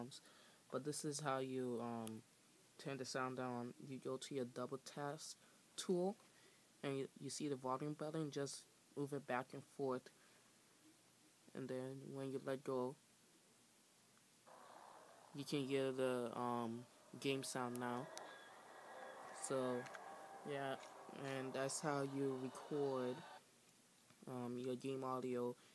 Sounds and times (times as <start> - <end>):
Speech: 0.0 - 2.2, 2.8 - 6.2, 6.8 - 10.2, 11.5 - 13.0, 15.4 - 23.4, 24.2 - 25.6.